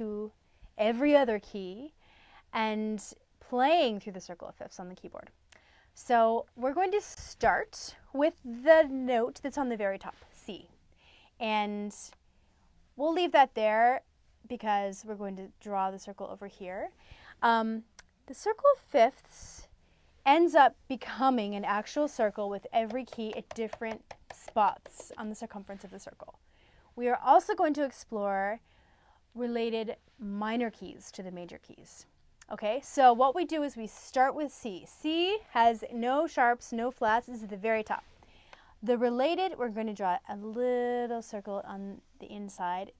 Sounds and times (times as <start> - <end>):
Speech: 0.0 - 1.9, 2.6 - 5.4, 6.0 - 10.8, 11.4 - 12.2, 13.0 - 19.7, 20.3 - 26.4, 27.0 - 28.6, 29.4 - 38.0, 38.8 - 42.9.